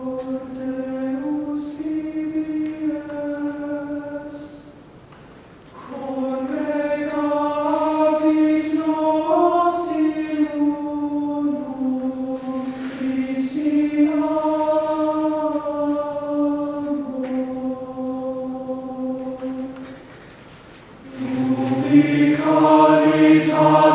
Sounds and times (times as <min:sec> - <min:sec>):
Choir: 0:00.0 - 0:04.8, 0:05.8 - 0:20.1, 0:21.0 - 0:23.9.